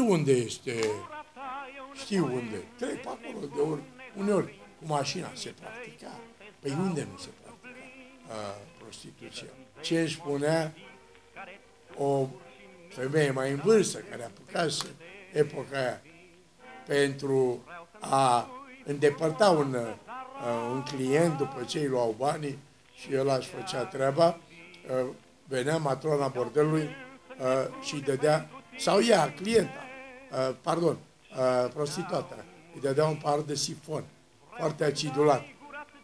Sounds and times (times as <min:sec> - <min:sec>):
Speech: 0:00.0 - 0:01.1, 0:02.0 - 0:10.8, 0:12.0 - 0:12.4, 0:13.0 - 0:16.0, 0:16.9 - 0:35.5
Music: 0:00.0 - 0:36.0.